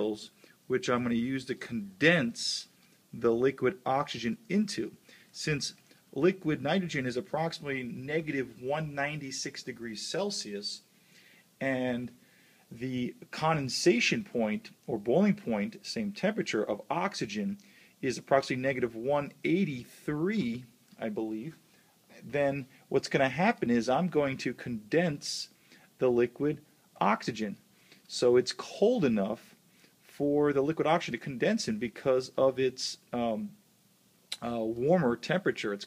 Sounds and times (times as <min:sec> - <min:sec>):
Speech: 0:00.0 - 0:10.9, 0:11.6 - 0:33.6, 0:34.4 - 0:35.8.